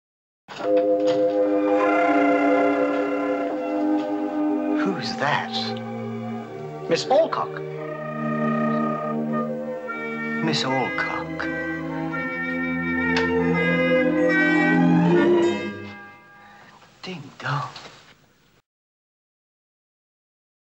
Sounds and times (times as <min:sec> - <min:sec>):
Music: 0:00.6 - 0:16.7
Speech: 0:04.8 - 0:05.8, 0:06.9 - 0:07.6, 0:10.4 - 0:11.5, 0:17.0 - 0:17.8.